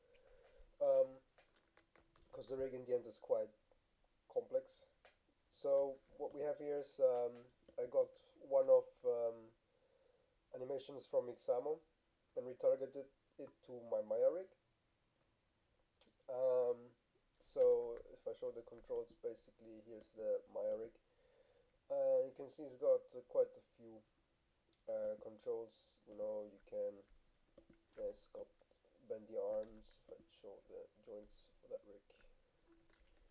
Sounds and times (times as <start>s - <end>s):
Speech: 0.8s - 1.3s, 2.3s - 3.6s, 4.3s - 9.6s, 10.6s - 14.6s, 16.0s - 21.0s, 21.9s - 24.1s, 24.8s - 27.1s, 27.9s - 32.3s.